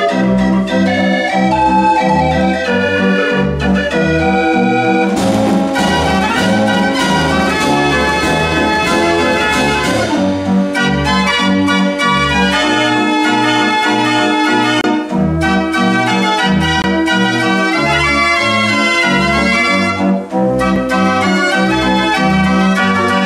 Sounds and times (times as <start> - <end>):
Music: 0.0 - 23.2.